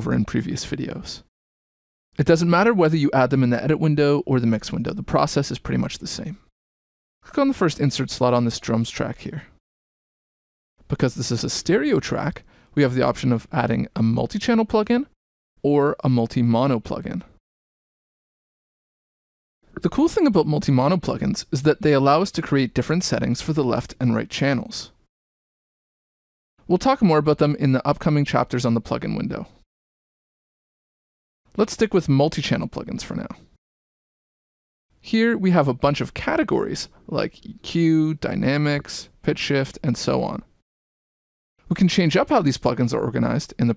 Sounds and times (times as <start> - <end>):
Speech: 0.0 - 1.3, 2.2 - 6.5, 7.2 - 9.6, 10.9 - 17.4, 19.7 - 25.0, 26.7 - 29.6, 31.5 - 33.5, 35.0 - 40.5, 41.7 - 43.7.